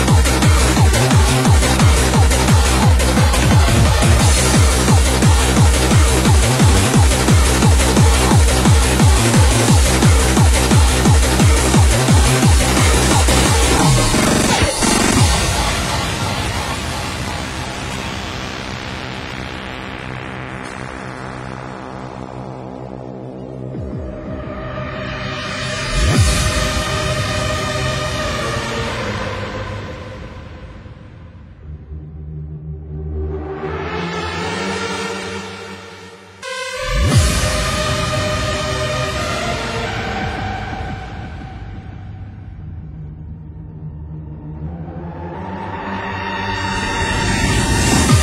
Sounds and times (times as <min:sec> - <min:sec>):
Music: 0:00.0 - 0:48.2.